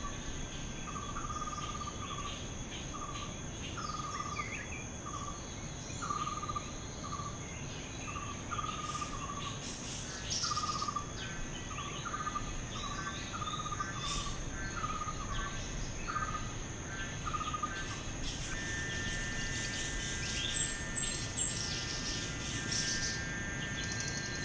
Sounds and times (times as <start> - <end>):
Cricket: 0.0 - 24.4.